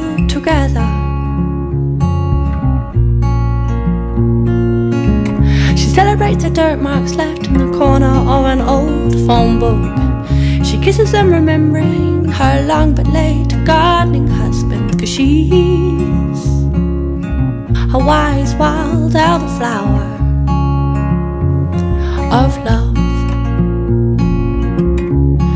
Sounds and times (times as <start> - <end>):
Music: 0.0 - 25.5.